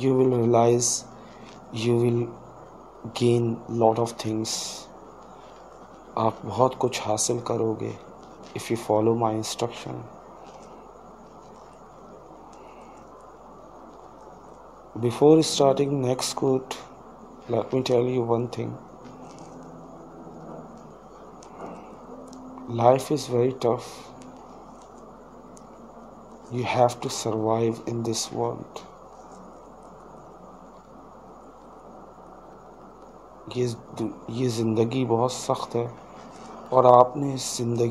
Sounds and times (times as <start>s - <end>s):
Speech: 0.0s - 1.1s, 1.7s - 2.4s, 3.0s - 4.9s, 6.2s - 10.1s, 15.0s - 16.9s, 17.5s - 18.8s, 22.7s - 24.1s, 26.5s - 28.9s, 33.5s - 36.0s, 36.7s - 37.9s.